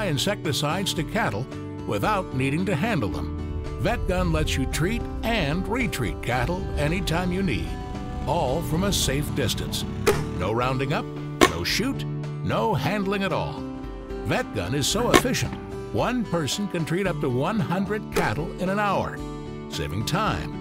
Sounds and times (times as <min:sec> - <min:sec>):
Speech: 0:00.0 - 0:13.6, 0:14.2 - 0:20.6
Music: 0:00.0 - 0:20.6.